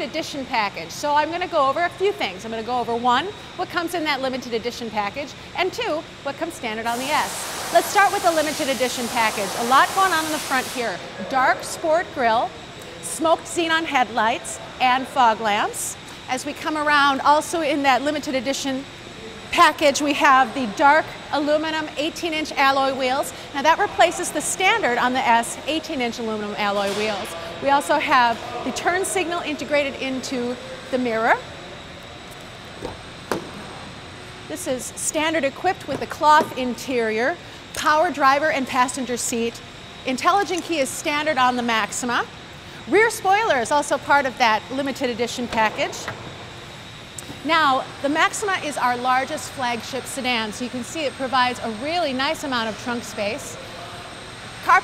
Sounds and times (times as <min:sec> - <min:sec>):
Speech: 0:19.5 - 0:31.4.